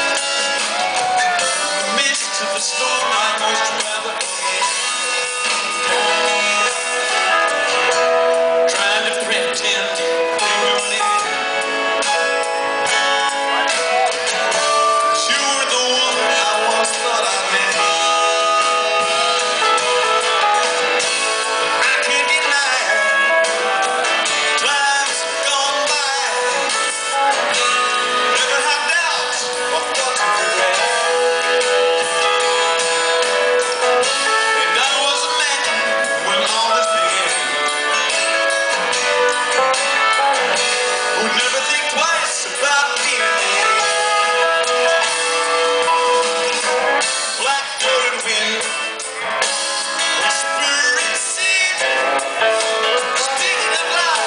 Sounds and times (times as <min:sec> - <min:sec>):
Music: 0:00.0 - 0:54.2.